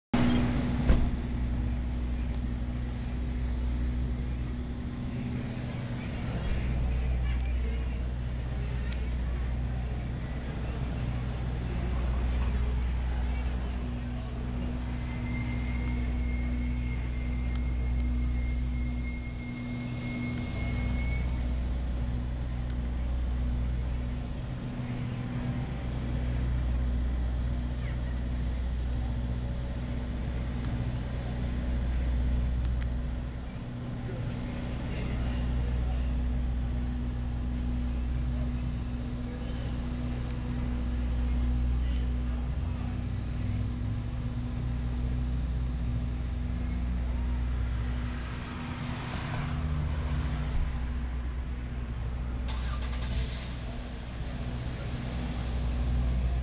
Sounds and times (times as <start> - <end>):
Inside, public space: 0.2 - 56.4
Speech: 5.1 - 15.2, 22.5 - 32.5, 33.2 - 44.0.